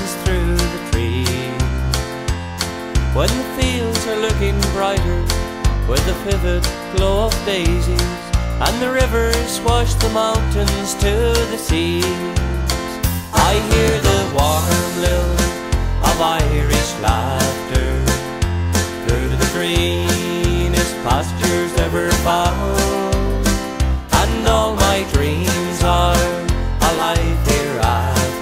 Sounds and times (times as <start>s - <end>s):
Male singing: 0.0s - 1.7s, 3.2s - 5.3s, 5.9s - 12.6s, 13.4s - 18.2s, 19.0s - 28.4s
Music: 0.0s - 28.4s.